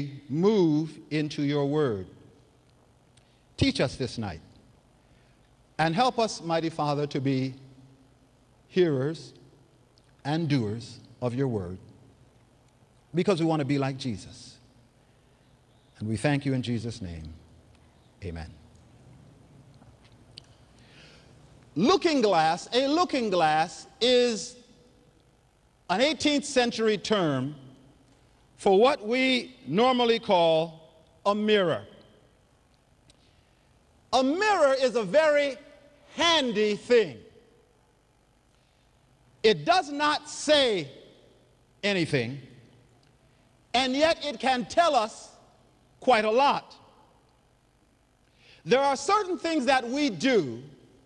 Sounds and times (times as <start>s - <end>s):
Speech: 0.0s - 2.2s, 3.6s - 4.5s, 5.8s - 7.7s, 8.7s - 9.4s, 10.2s - 11.9s, 13.1s - 14.7s, 16.0s - 17.4s, 18.2s - 18.7s, 21.8s - 24.7s, 25.9s - 27.7s, 28.6s - 32.0s, 34.1s - 37.4s, 39.4s - 41.1s, 41.8s - 42.7s, 43.7s - 46.9s, 48.6s - 50.8s.